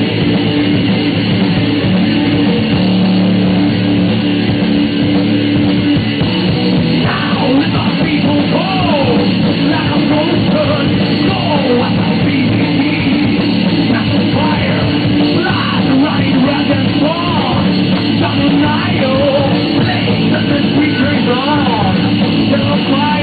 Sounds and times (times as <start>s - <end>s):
Bass drum: 0.0s - 23.2s
Drum kit: 0.0s - 23.2s
Guitar: 0.0s - 23.2s
Heavy metal: 0.0s - 23.2s.